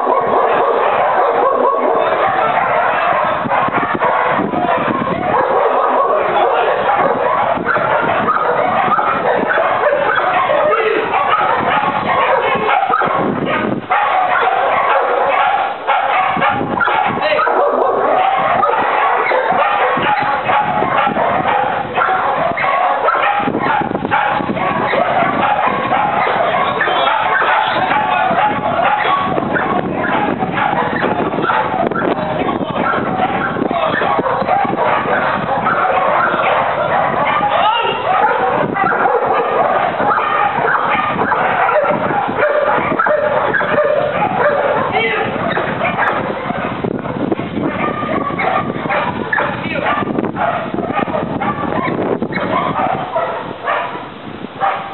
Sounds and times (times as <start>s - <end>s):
Bow-wow: 0.0s - 54.9s
Yip: 0.1s - 32.2s, 32.8s - 54.0s, 54.6s - 54.9s.